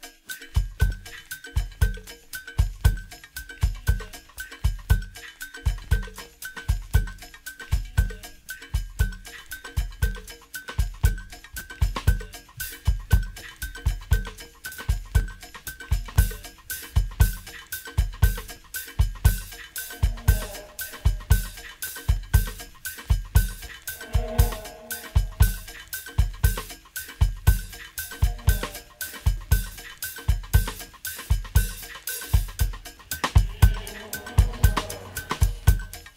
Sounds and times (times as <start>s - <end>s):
Music: 0.0s - 36.1s.